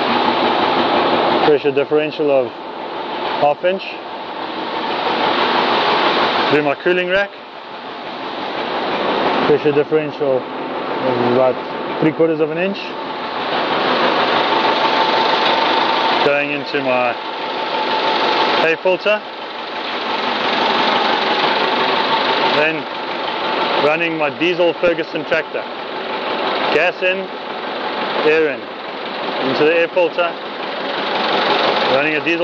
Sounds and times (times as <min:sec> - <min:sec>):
Speech: 0:01.5 - 0:02.5, 0:03.4 - 0:04.0, 0:06.5 - 0:07.4, 0:09.5 - 0:10.4, 0:11.0 - 0:13.0, 0:16.2 - 0:17.2, 0:18.6 - 0:19.2, 0:22.5 - 0:22.9, 0:23.8 - 0:25.7, 0:26.7 - 0:27.3, 0:28.2 - 0:28.6, 0:29.4 - 0:30.4, 0:31.9 - 0:32.4.